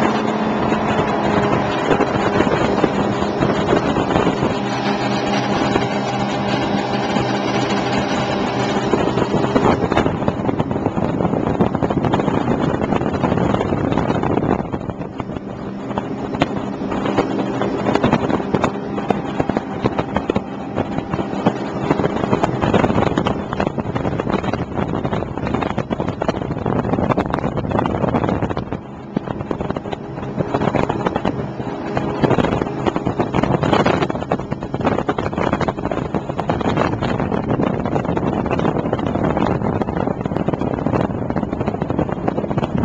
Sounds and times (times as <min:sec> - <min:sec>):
Sailboat, sailing ship: 0:00.0 - 0:42.8.